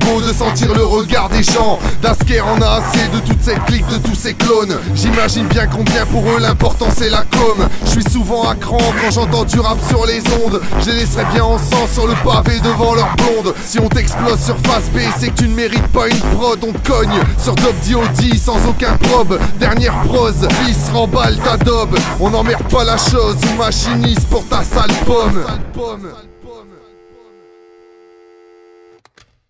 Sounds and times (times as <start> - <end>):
Rapping: 0.0 - 27.4
Hip hop music: 0.0 - 27.8.